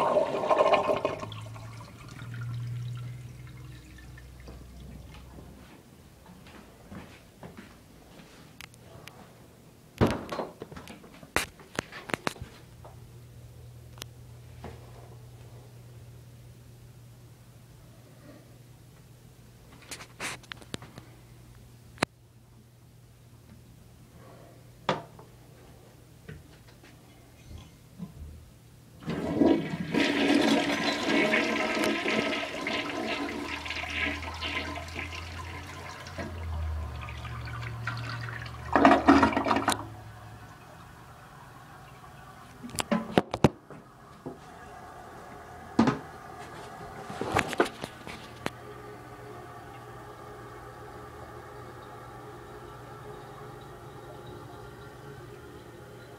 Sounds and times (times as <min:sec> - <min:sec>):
Toilet flush: 0:00.0 - 0:04.9, 0:29.0 - 0:43.2, 0:43.8 - 0:47.2, 0:48.7 - 0:56.1
Water: 0:00.0 - 0:05.5, 0:33.0 - 0:46.4, 0:49.3 - 0:56.1.